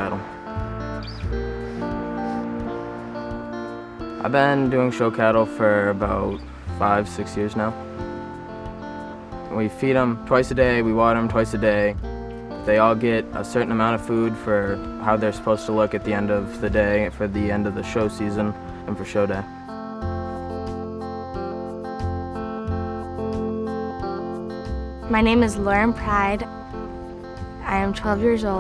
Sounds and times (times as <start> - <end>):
Music: 0.0 - 28.6
Speech: 12.7 - 19.5, 25.1 - 26.5, 27.6 - 28.6.